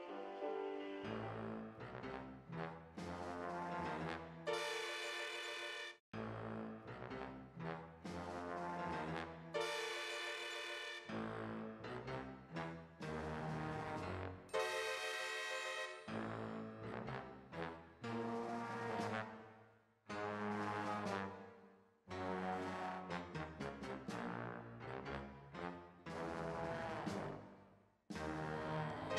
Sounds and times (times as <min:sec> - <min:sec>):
Music: 0:00.0 - 0:29.1.